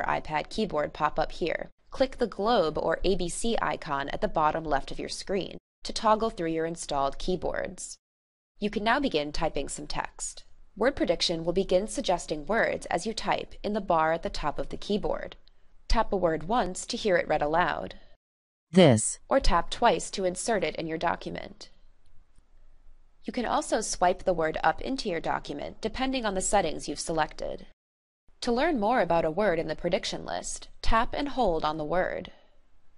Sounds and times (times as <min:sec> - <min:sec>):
Speech: 0:00.0 - 0:08.0, 0:08.6 - 0:17.9, 0:18.8 - 0:21.7, 0:23.3 - 0:27.7, 0:28.4 - 0:32.3.